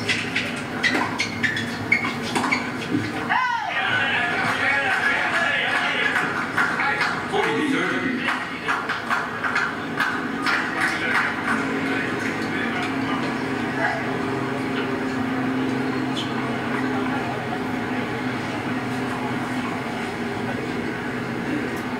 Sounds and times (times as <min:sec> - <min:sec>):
Speech: 0:03.3 - 0:08.9.